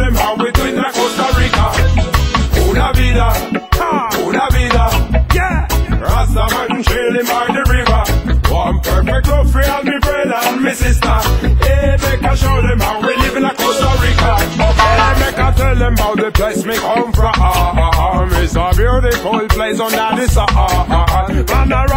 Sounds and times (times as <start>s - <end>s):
Music: 0.0s - 21.9s.